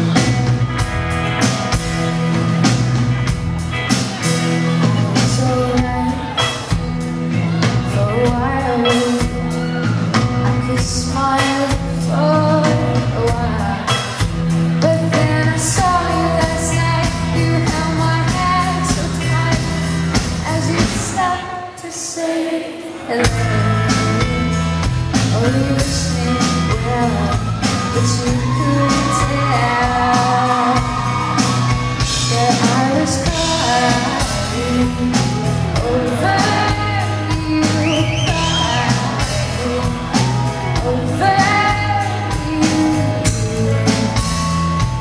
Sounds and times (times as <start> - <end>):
Music: 0.0 - 45.0.